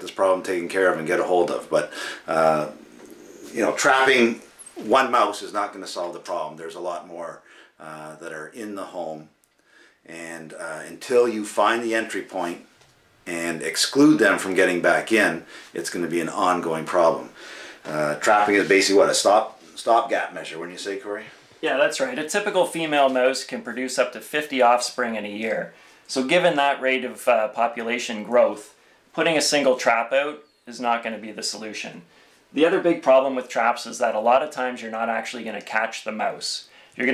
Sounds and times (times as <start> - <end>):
Speech: 0.0 - 2.8, 3.5 - 9.3, 10.1 - 12.7, 13.3 - 37.1.